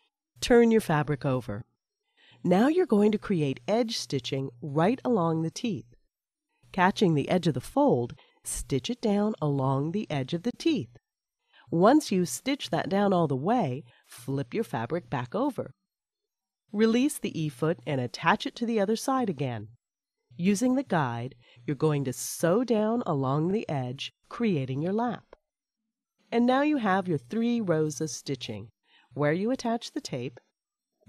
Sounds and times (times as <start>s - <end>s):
Speech: 0.4s - 1.6s, 2.5s - 5.9s, 6.8s - 10.9s, 11.7s - 15.7s, 16.8s - 19.8s, 20.4s - 25.4s, 26.4s - 30.4s.